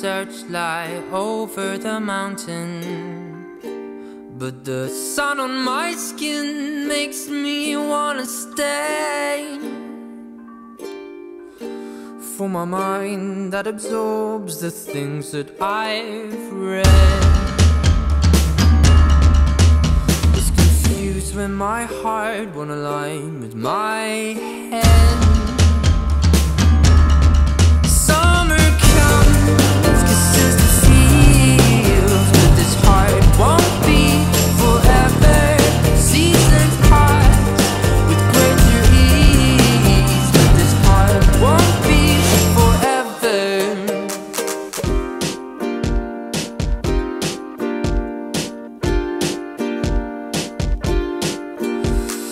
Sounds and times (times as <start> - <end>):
Music: 0.0 - 52.3.